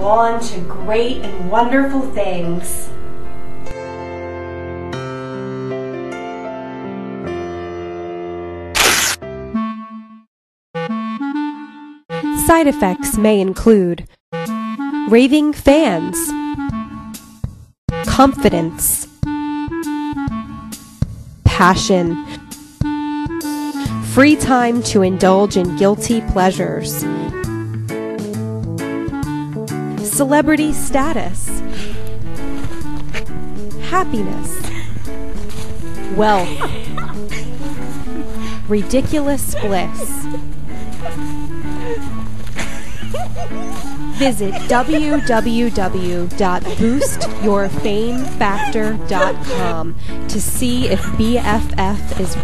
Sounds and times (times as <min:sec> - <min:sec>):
Speech: 0:00.0 - 0:02.9, 0:12.4 - 0:14.0, 0:15.1 - 0:16.4, 0:18.1 - 0:19.1, 0:21.5 - 0:22.2, 0:24.1 - 0:27.0, 0:30.1 - 0:31.6, 0:33.8 - 0:34.6, 0:36.1 - 0:36.5, 0:38.7 - 0:40.2, 0:44.2 - 0:52.4
Music: 0:00.0 - 0:52.4.